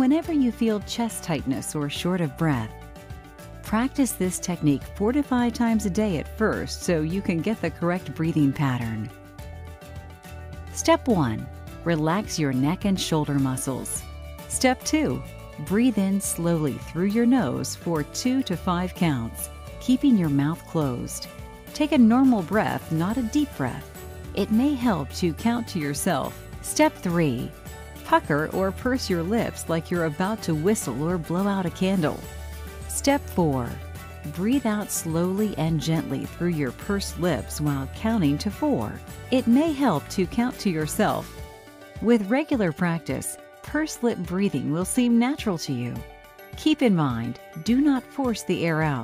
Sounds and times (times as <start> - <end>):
Speech: 0.0 - 2.7, 3.7 - 9.1, 10.8 - 21.2, 21.8 - 23.8, 24.4 - 27.5, 28.1 - 32.2, 32.9 - 41.3, 42.0 - 46.0, 46.6 - 49.0
Music: 0.0 - 49.0.